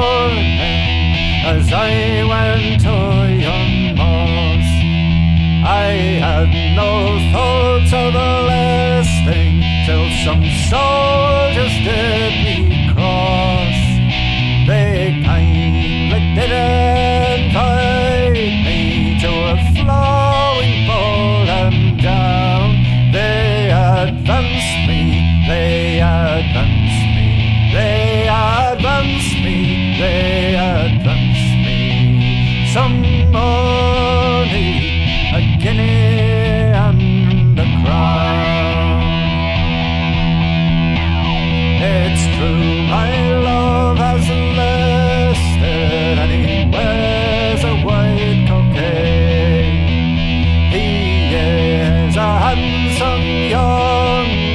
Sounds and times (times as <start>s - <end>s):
Independent music: 0.0s - 54.5s.